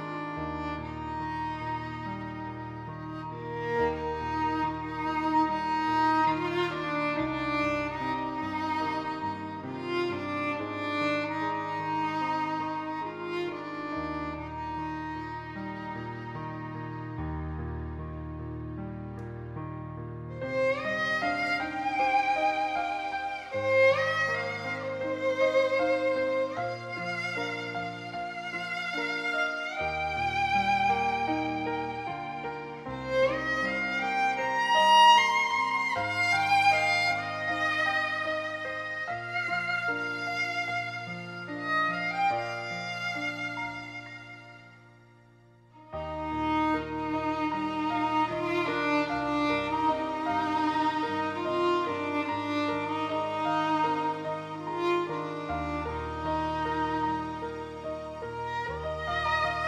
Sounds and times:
Violin, fiddle: 0:00.0 - 0:59.6.

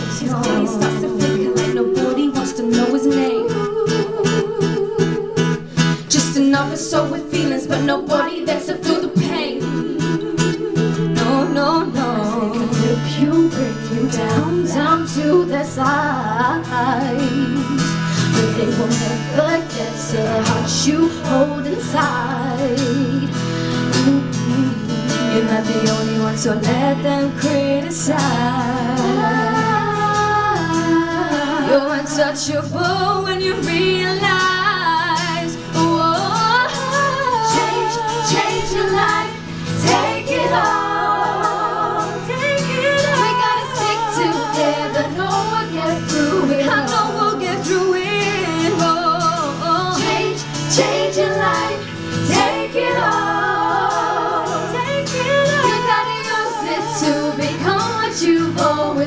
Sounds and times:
Female singing: 0:00.0 - 0:05.4, 0:06.1 - 0:23.4, 0:24.0 - 0:59.0
Inside, large room or hall: 0:00.0 - 0:59.0
Music: 0:00.0 - 0:59.0.

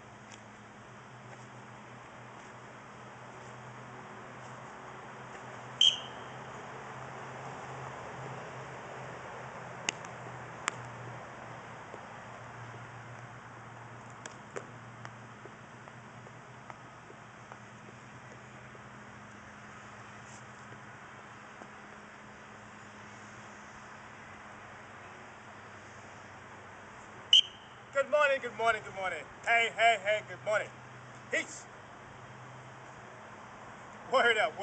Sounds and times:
Speech: 0:28.0 - 0:30.7, 0:31.3 - 0:31.7, 0:34.1 - 0:34.6.

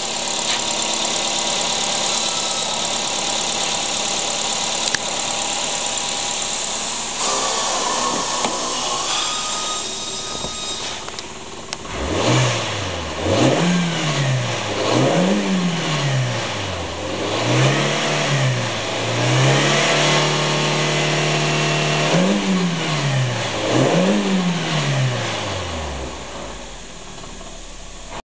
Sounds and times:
Car: 0:00.0 - 0:28.2
Idling: 0:00.0 - 0:28.2
Medium engine (mid frequency): 0:00.0 - 0:28.2
Accelerating, revving, vroom: 0:11.9 - 0:26.2.

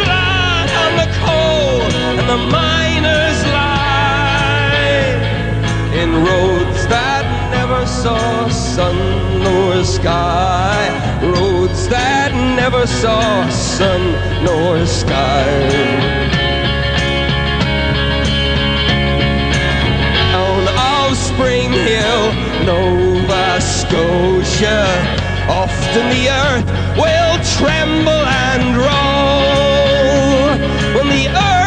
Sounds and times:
Singing: 0:00.0 - 0:05.3, 0:20.3 - 0:31.6
Pop music: 0:00.0 - 0:31.6
Rock and roll: 0:00.0 - 0:31.6.

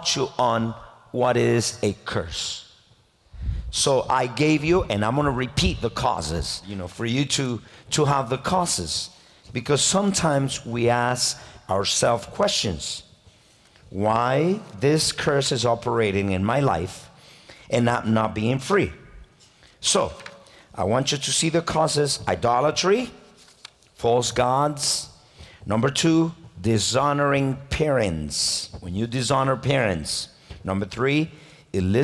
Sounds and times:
Speech: 0:00.0 - 0:02.7, 0:03.7 - 0:13.1, 0:13.9 - 0:17.1, 0:17.7 - 0:19.1, 0:19.8 - 0:20.2, 0:20.8 - 0:23.2, 0:24.0 - 0:32.0.

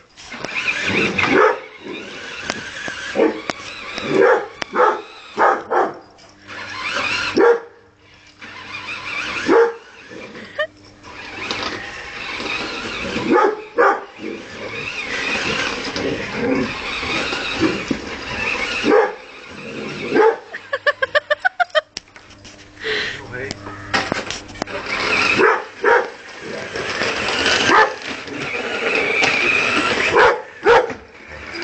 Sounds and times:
Outside, urban or manmade: 0:00.0 - 0:31.6
Canidae, dogs, wolves: 0:03.0 - 0:07.8, 0:09.2 - 0:10.6, 0:13.0 - 0:16.8, 0:18.4 - 0:20.6, 0:24.8 - 0:26.8, 0:27.4 - 0:28.6, 0:29.8 - 0:31.0
Dog: 0:04.1 - 0:06.0, 0:07.3 - 0:07.7, 0:18.8 - 0:19.2, 0:20.1 - 0:20.5, 0:25.3 - 0:26.2, 0:27.6 - 0:28.0, 0:30.0 - 0:31.0.

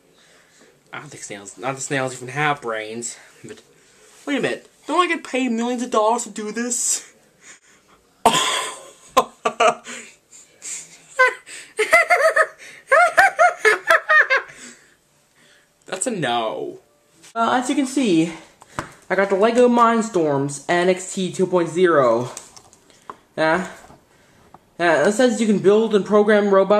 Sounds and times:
Inside, small room: 0:00.0 - 0:26.7
Speech: 0:00.8 - 0:07.4, 0:15.9 - 0:18.5, 0:19.1 - 0:22.4, 0:23.4 - 0:23.8, 0:24.8 - 0:26.7.

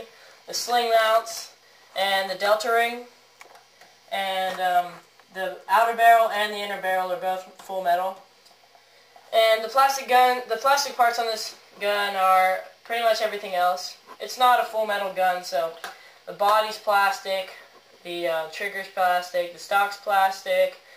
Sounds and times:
Speech: 0:00.0 - 0:03.2, 0:04.1 - 0:08.3, 0:09.3 - 0:20.9.

